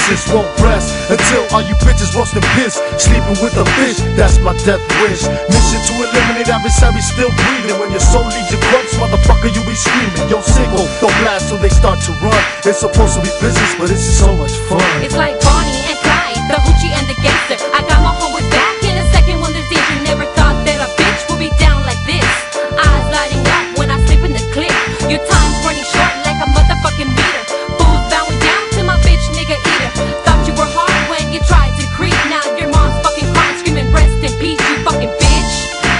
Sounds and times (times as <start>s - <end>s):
Rapping: 0.0s - 35.6s
Hip hop music: 0.0s - 35.9s.